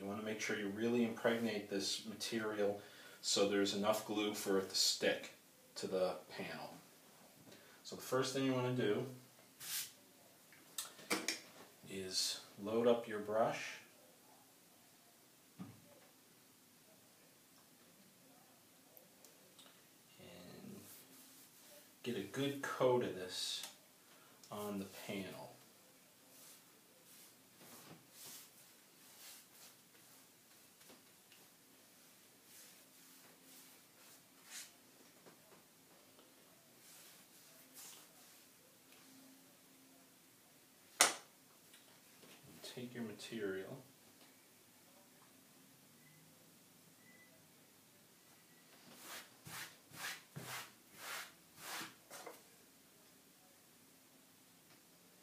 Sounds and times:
Speech: 0.0s - 6.8s, 7.9s - 9.2s, 11.8s - 14.0s, 21.8s - 23.8s, 24.5s - 25.6s, 42.6s - 43.9s
Inside, small room: 0.0s - 55.2s.

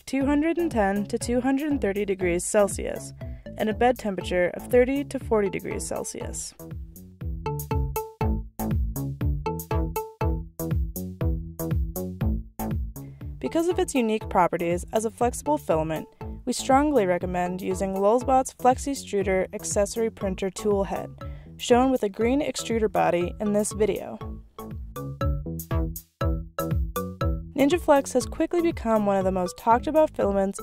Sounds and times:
Speech: 0.0s - 6.6s, 13.4s - 24.2s, 27.6s - 30.6s
Music: 0.0s - 30.6s.

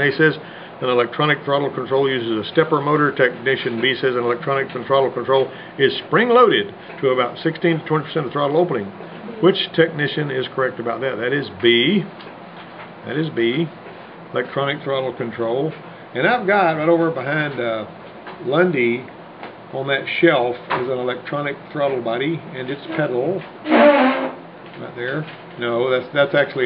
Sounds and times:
Speech: 0.0s - 12.2s, 13.0s - 19.1s, 19.7s - 23.5s, 24.8s - 26.6s.

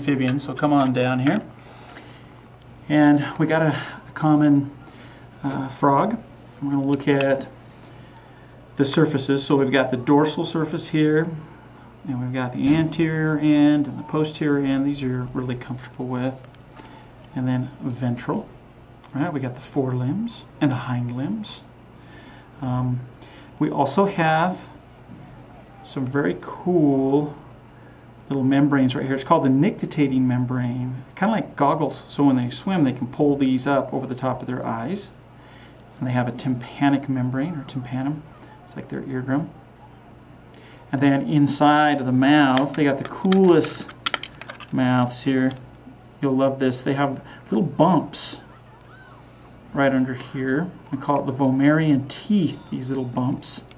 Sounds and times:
Speech: 0.0s - 1.5s, 2.8s - 4.8s, 5.4s - 7.6s, 8.8s - 16.4s, 17.3s - 21.7s, 22.6s - 27.4s, 28.3s - 35.2s, 36.0s - 40.1s, 40.9s - 43.9s, 44.7s - 45.6s, 46.2s - 49.1s, 49.7s - 53.7s.

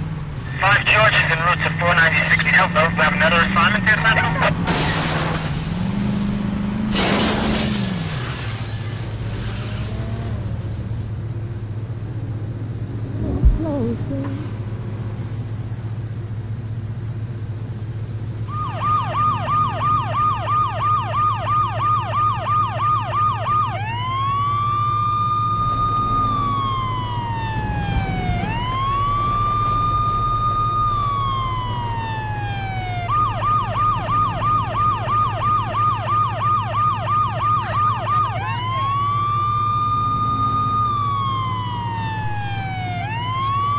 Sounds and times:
Ambulance (siren): 0.5s - 4.6s, 18.4s - 43.7s
Police car (siren): 0.5s - 5.2s, 18.4s - 43.7s.

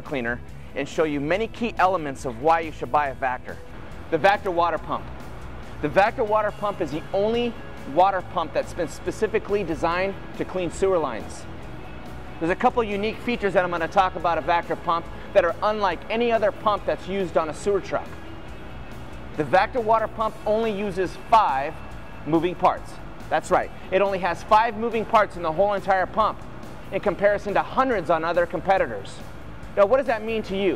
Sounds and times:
Speech: 0.0s - 5.1s, 5.8s - 11.5s, 12.4s - 18.2s, 19.4s - 29.2s, 29.8s - 30.7s
Music: 0.0s - 30.7s.

